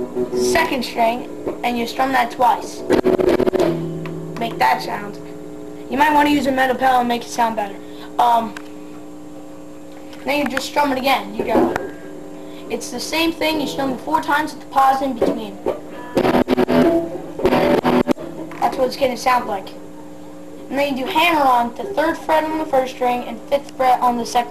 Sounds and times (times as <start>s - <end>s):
Music: 0.0s - 1.6s, 2.8s - 5.6s, 13.6s - 14.0s, 15.6s - 18.6s
Speech: 0.4s - 2.8s, 4.4s - 5.3s, 5.9s - 8.6s, 10.2s - 11.9s, 12.7s - 16.2s, 18.6s - 19.8s, 20.7s - 24.5s.